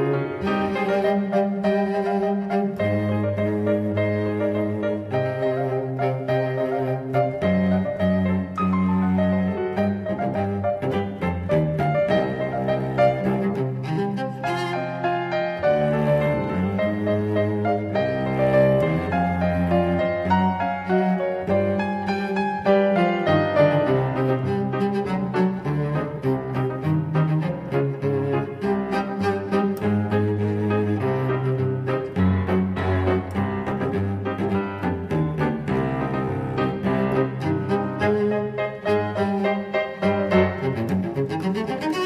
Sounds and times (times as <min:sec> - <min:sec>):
Music: 0:00.0 - 0:42.0.